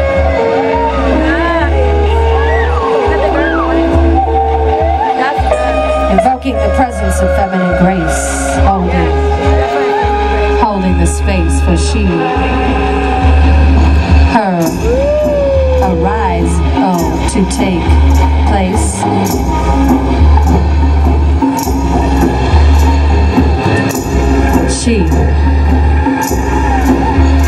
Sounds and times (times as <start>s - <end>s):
Music: 0.0s - 27.4s
Speech: 2.8s - 4.0s, 5.0s - 12.4s, 14.3s - 15.0s, 15.6s - 19.4s, 24.6s - 25.4s.